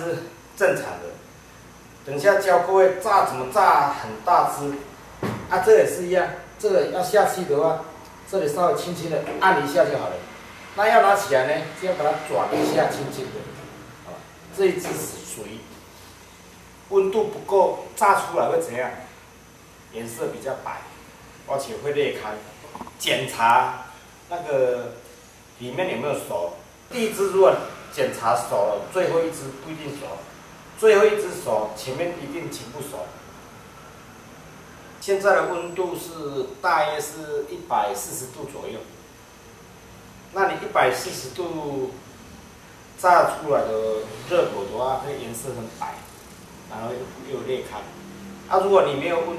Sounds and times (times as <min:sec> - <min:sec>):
Speech: 0:00.0 - 0:01.3, 0:02.1 - 0:15.8, 0:16.9 - 0:19.2, 0:19.9 - 0:25.0, 0:25.6 - 0:33.2, 0:35.0 - 0:39.0, 0:40.3 - 0:42.0, 0:43.0 - 0:49.3.